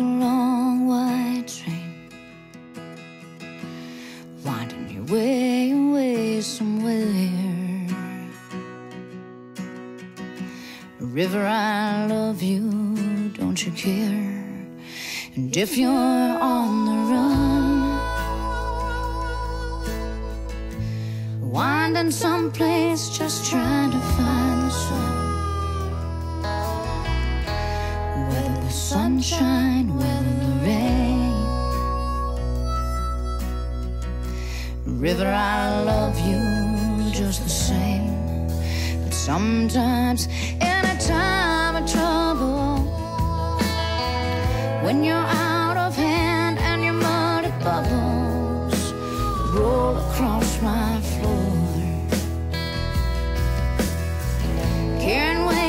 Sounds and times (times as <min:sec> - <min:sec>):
Music: 0:00.0 - 0:55.6.